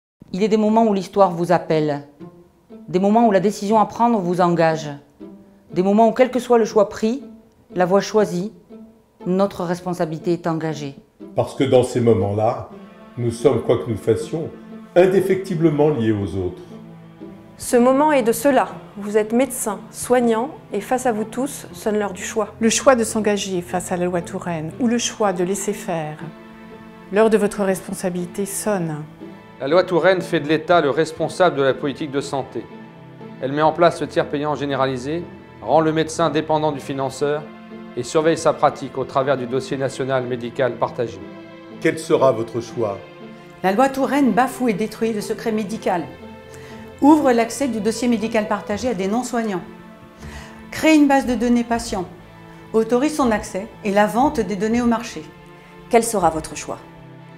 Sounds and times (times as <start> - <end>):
Music: 0.2 - 57.3.